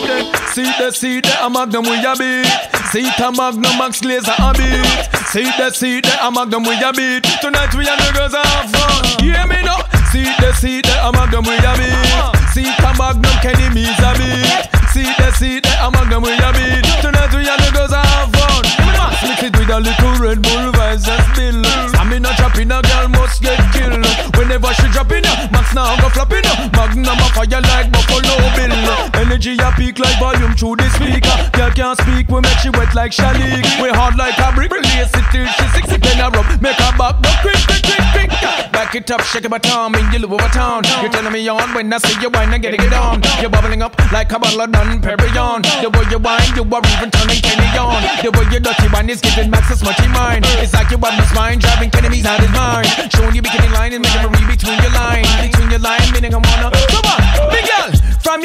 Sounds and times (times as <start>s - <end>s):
Music: 0.0s - 58.4s.